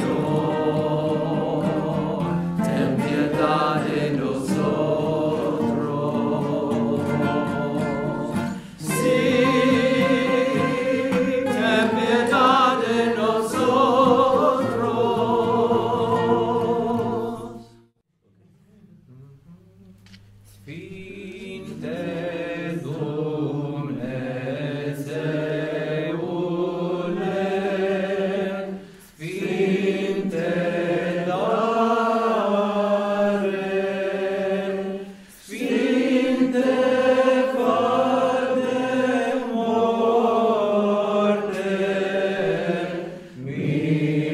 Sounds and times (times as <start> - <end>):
A capella: 0.0 - 17.9, 18.6 - 44.3
Inside, large room or hall: 0.0 - 44.3.